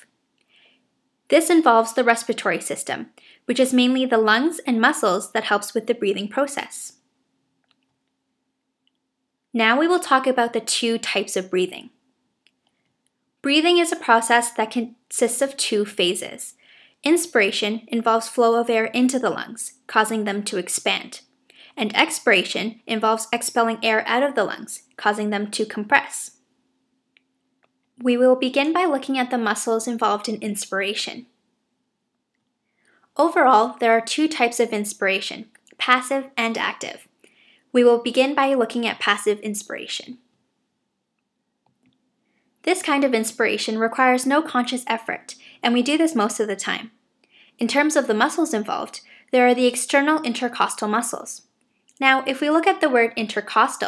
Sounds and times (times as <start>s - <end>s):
Speech: 1.3s - 7.0s, 9.6s - 12.0s, 13.5s - 26.4s, 28.0s - 31.4s, 33.2s - 37.1s, 37.8s - 40.2s, 42.7s - 47.0s, 47.6s - 53.8s.